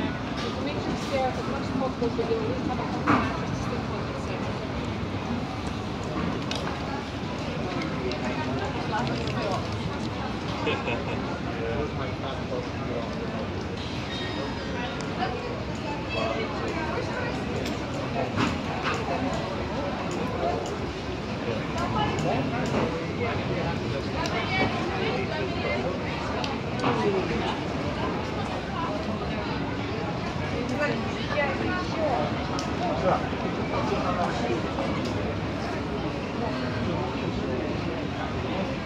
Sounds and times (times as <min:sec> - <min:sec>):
Speech: 0:00.0 - 0:38.8.